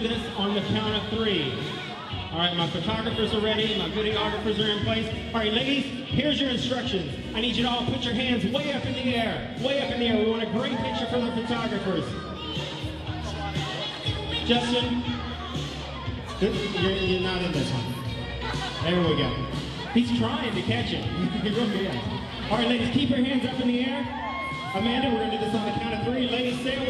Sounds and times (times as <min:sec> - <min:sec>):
Speech: 0:00.0 - 0:15.2, 0:16.3 - 0:24.1, 0:24.7 - 0:26.8
Music: 0:00.0 - 0:26.8.